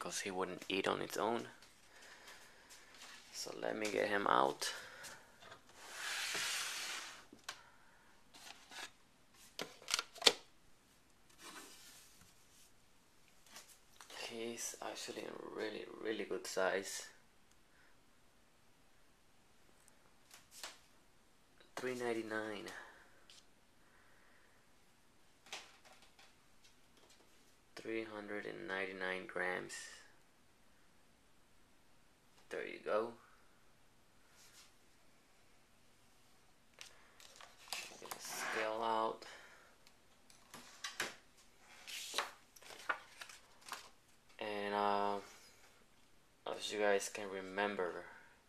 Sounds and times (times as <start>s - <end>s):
Speech: 0.0s - 1.6s, 3.3s - 4.8s, 14.1s - 17.2s, 21.6s - 23.0s, 27.8s - 30.2s, 32.5s - 33.3s, 38.0s - 39.5s, 44.4s - 45.4s, 46.4s - 48.2s
Inside, small room: 0.0s - 48.4s.